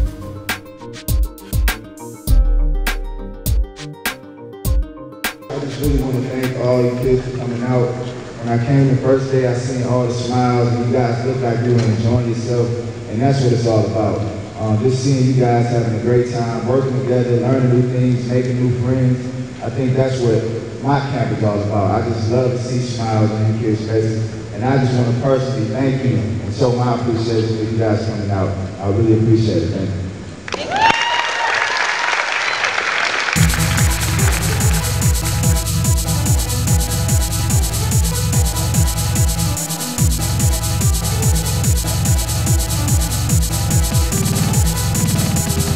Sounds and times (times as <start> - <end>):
Music: 0.0 - 7.5, 33.4 - 45.7
Speech: 5.5 - 30.0
Applause: 30.5 - 35.2.